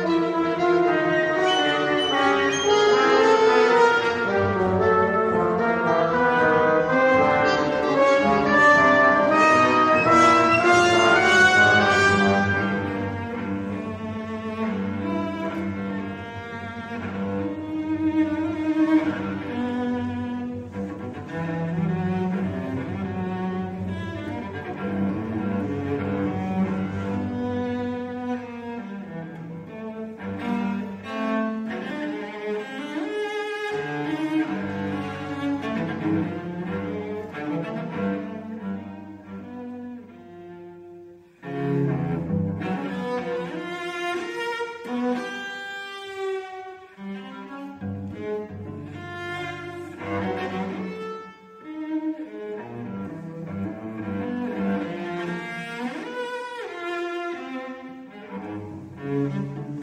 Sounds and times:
Brass instrument: 0.0 - 14.1
Clarinet: 0.0 - 23.3.

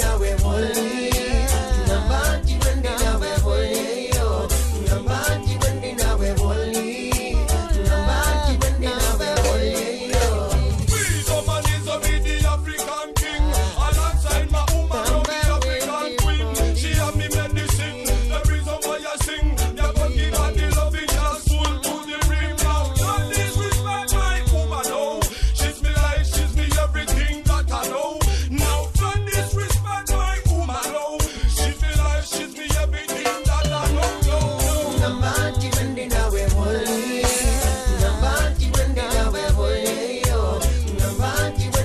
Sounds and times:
Reggae: 0.0 - 41.8.

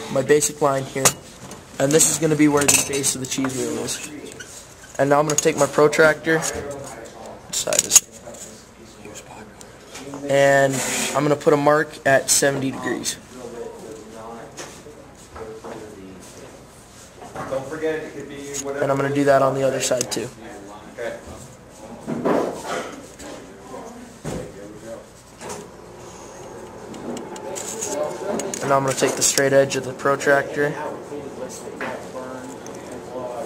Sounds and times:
Speech: 5.0 - 16.5, 17.4 - 25.2, 27.4 - 33.4.

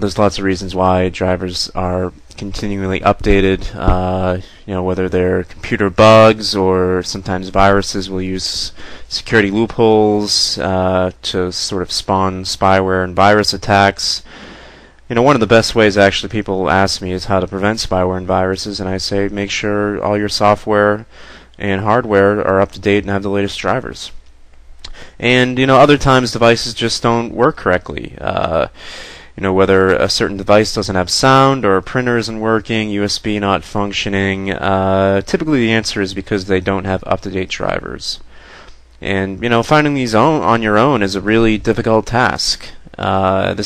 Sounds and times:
Speech: 0.0 - 14.3, 15.1 - 24.2, 24.9 - 38.3, 39.0 - 43.6.

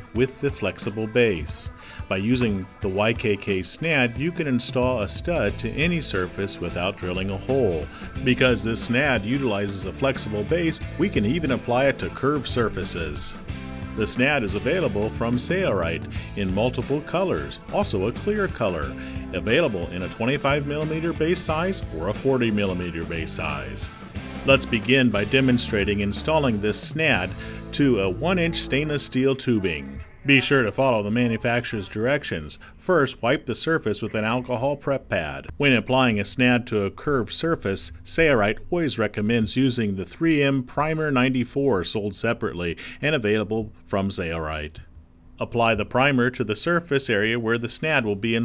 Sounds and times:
Speech: 0.0 - 13.4, 14.0 - 48.4
Music: 0.0 - 43.0, 43.6 - 48.4.

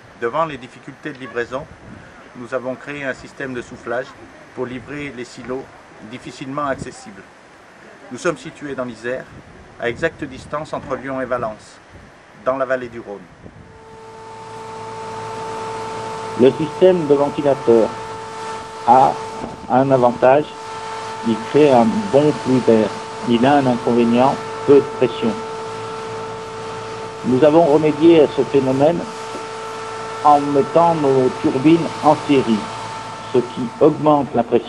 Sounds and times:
Speech: 0.2 - 1.7, 2.4 - 7.3, 7.9 - 11.8, 12.4 - 13.3, 16.4 - 18.0, 18.9 - 20.5, 21.2 - 25.4, 27.2 - 29.1, 30.2 - 32.7, 33.3 - 34.6.

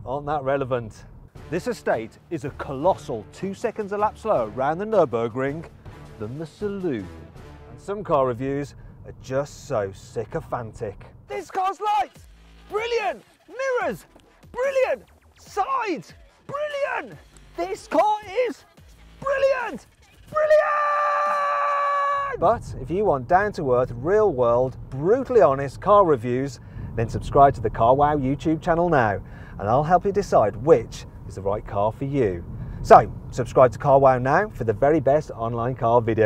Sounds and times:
Speech: 0.0 - 7.1, 7.8 - 18.6, 19.2 - 20.7, 22.3 - 36.2
Car: 0.0 - 15.3, 21.9 - 36.2.

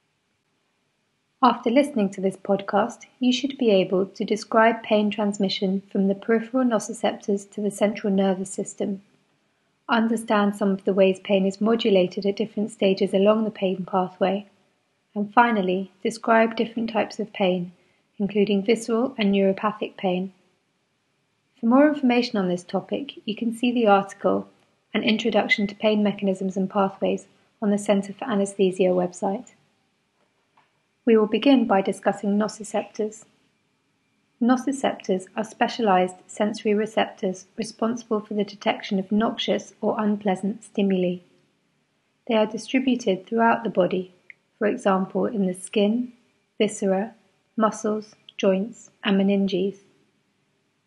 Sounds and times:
Speech: 1.4 - 9.0, 9.9 - 14.4, 15.2 - 20.3, 21.6 - 29.5, 31.1 - 33.3, 34.4 - 41.2, 42.3 - 49.8.

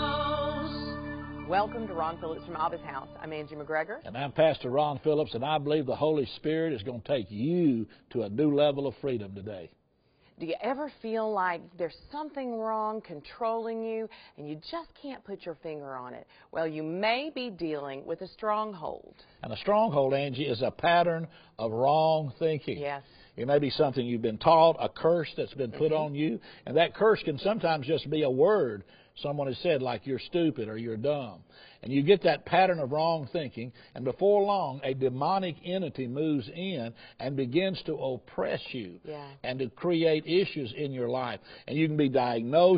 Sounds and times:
Speech: 1.5 - 9.7, 10.4 - 42.7.

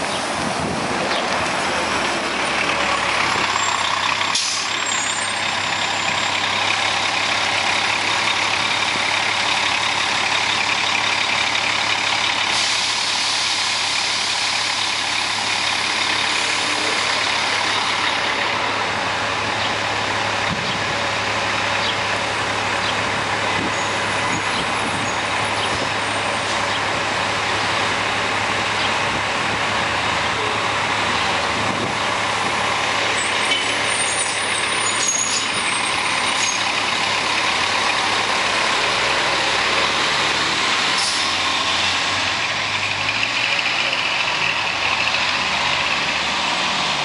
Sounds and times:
Bus: 0.0 - 47.0.

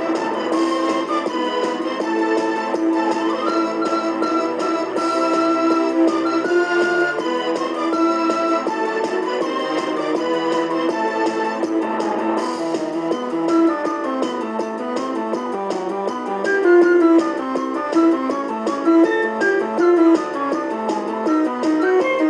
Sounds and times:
Flute: 0.0 - 12.2, 16.5 - 22.3.

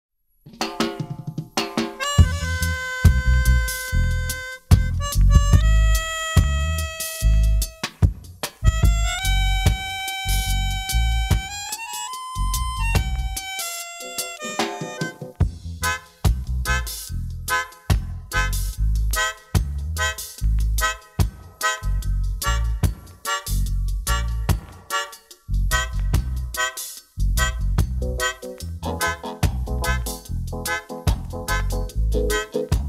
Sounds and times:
Music: 0.5 - 32.8.

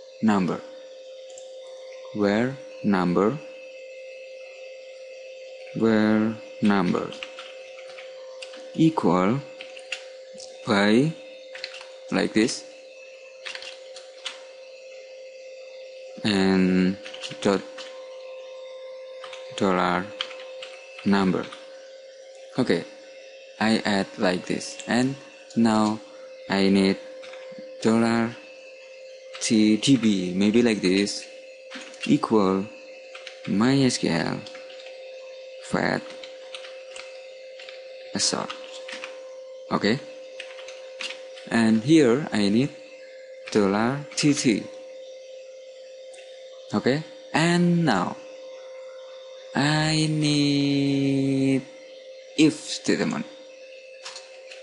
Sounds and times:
Speech: 0.2 - 0.6, 2.2 - 3.4, 5.8 - 7.2, 8.8 - 9.5, 10.5 - 11.2, 12.1 - 12.7, 16.2 - 17.7, 19.6 - 20.1, 21.0 - 21.6, 22.6 - 22.9, 23.6 - 27.0, 27.8 - 28.4, 29.4 - 31.3, 32.0 - 32.8, 33.4 - 34.5, 35.6 - 36.1, 38.2 - 38.6, 39.7 - 40.1, 41.5 - 42.8, 43.5 - 44.7, 46.7 - 48.2, 49.6 - 51.7, 52.4 - 53.3
Computer keyboard: 6.6 - 8.6, 11.5 - 11.9, 13.4 - 14.4, 17.0 - 17.9, 19.2 - 21.6, 33.1 - 33.6, 36.0 - 37.8, 38.4 - 39.2, 40.4 - 41.6.

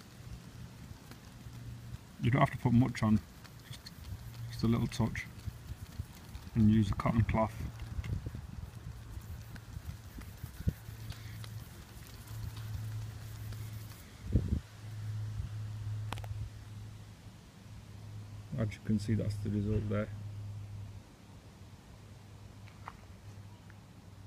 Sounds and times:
Speech: 2.2 - 3.2, 4.5 - 5.4, 6.6 - 7.7, 18.5 - 20.2.

